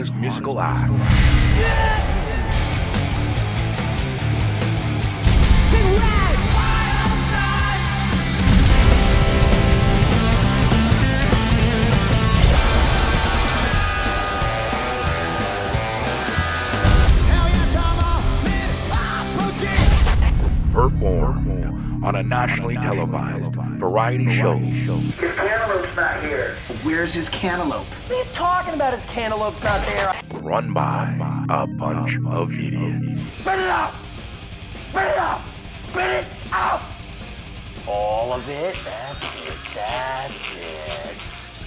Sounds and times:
Speech: 0:00.0 - 0:01.0, 0:20.8 - 0:26.6, 0:27.3 - 0:33.9
Music: 0:00.0 - 0:41.6.

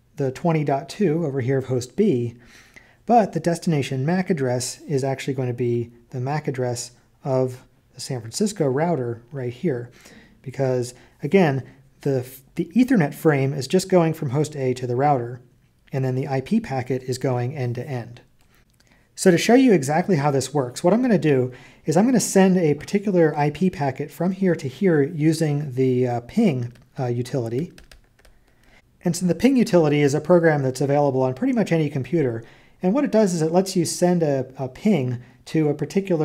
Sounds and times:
Speech: 0:00.2 - 0:02.4, 0:03.1 - 0:18.3, 0:19.2 - 0:27.8, 0:29.0 - 0:36.2.

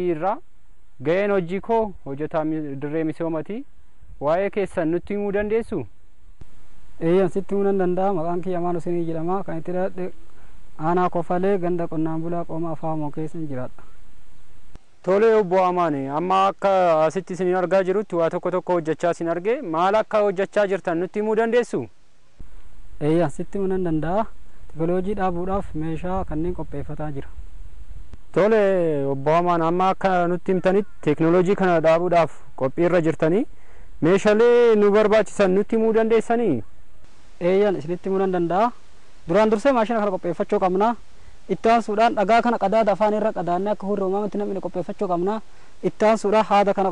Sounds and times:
Speech: 0:00.0 - 0:00.4, 0:01.0 - 0:05.9, 0:07.0 - 0:10.2, 0:10.8 - 0:14.0, 0:15.1 - 0:21.9, 0:23.0 - 0:27.4, 0:28.3 - 0:36.7, 0:37.4 - 0:46.9.

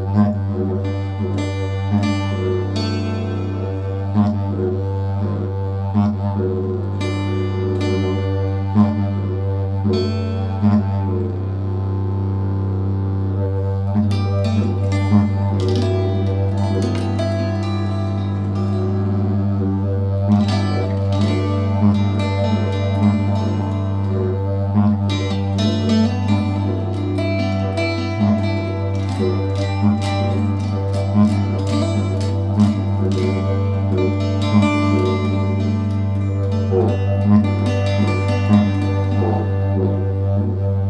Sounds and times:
Bowed string instrument: 0:00.0 - 0:40.9
Classical music: 0:14.0 - 0:40.9.

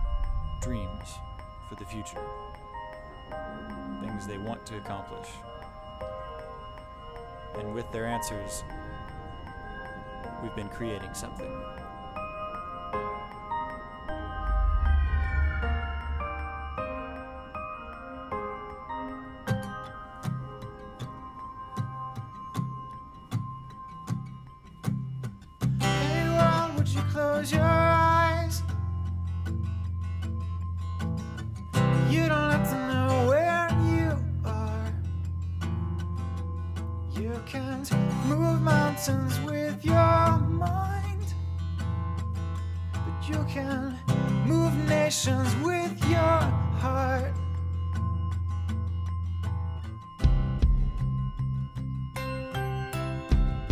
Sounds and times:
Music: 0:00.0 - 0:53.7
Speech: 0:00.6 - 0:02.2, 0:04.0 - 0:05.4, 0:07.6 - 0:08.7, 0:10.4 - 0:11.5.

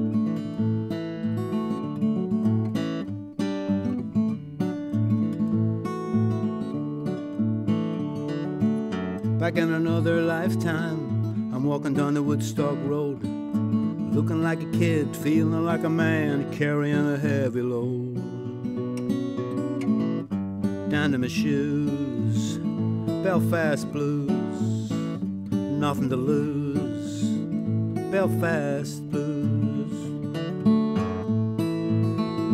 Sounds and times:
Music: 0:00.0 - 0:32.5.

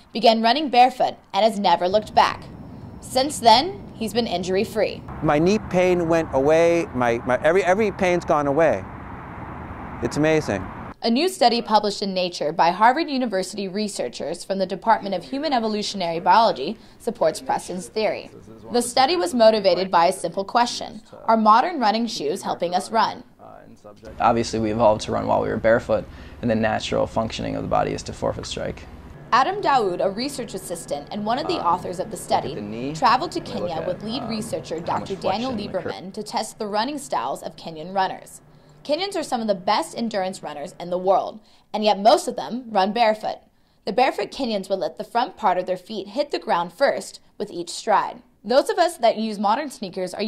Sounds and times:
Outside, urban or manmade: 0:00.0 - 0:13.8, 0:23.0 - 0:41.7
Speech: 0:03.1 - 0:08.8, 0:10.0 - 0:28.8, 0:29.4 - 0:50.2.

